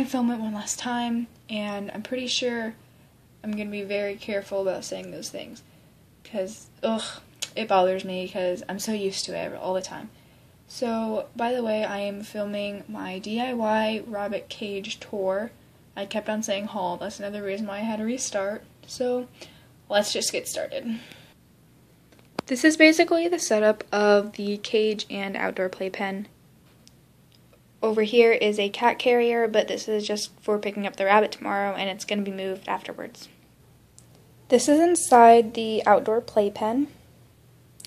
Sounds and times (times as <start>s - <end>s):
Speech: 0.0s - 2.8s, 3.4s - 21.1s, 22.4s - 26.4s, 27.8s - 33.4s, 34.5s - 37.0s.